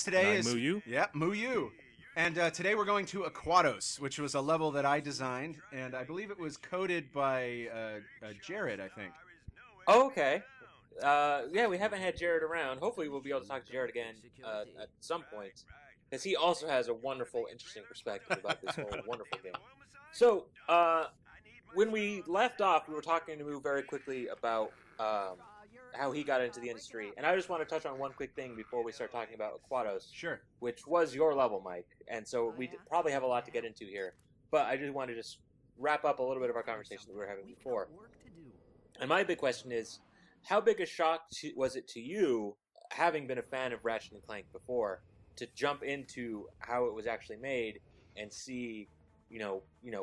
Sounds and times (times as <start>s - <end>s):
Speech: 0.0s - 50.0s.